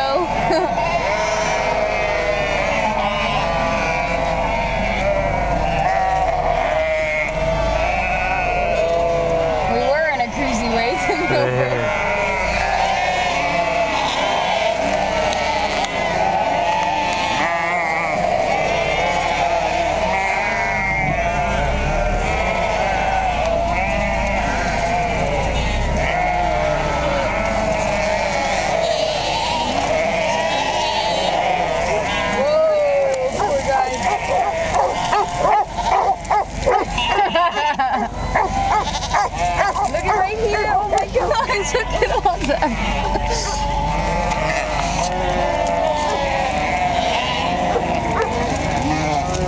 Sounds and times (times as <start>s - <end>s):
Bleat: 0.0s - 49.4s.